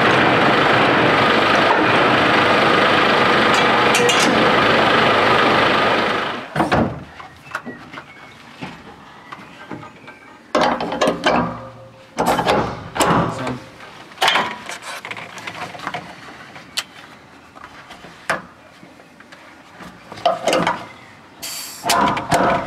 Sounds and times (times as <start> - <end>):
Speech: 13.2 - 13.7.